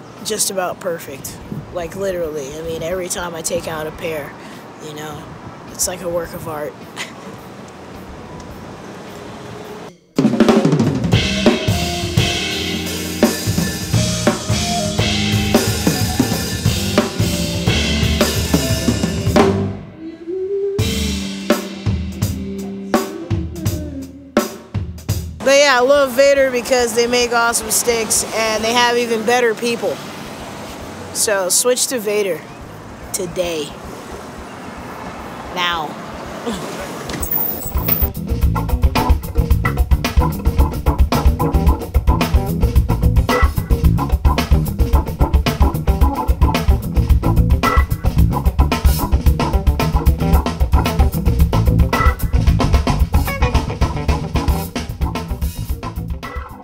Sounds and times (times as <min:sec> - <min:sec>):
Drum kit: 0:10.1 - 0:19.8, 0:20.8 - 0:25.8, 0:37.2 - 0:56.6
Drum: 0:10.2 - 0:19.7, 0:20.8 - 0:25.5, 0:37.7 - 0:56.6.